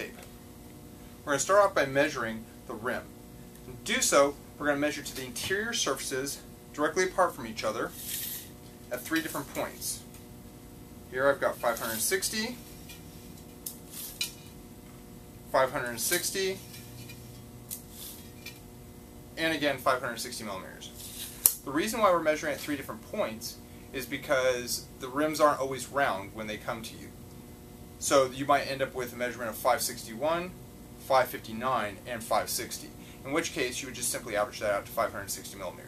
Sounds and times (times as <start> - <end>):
Speech: 0.0 - 0.3, 1.3 - 3.1, 3.7 - 8.0, 8.9 - 10.1, 11.1 - 12.6, 15.5 - 16.6, 19.4 - 21.0, 21.7 - 27.2, 28.0 - 35.8.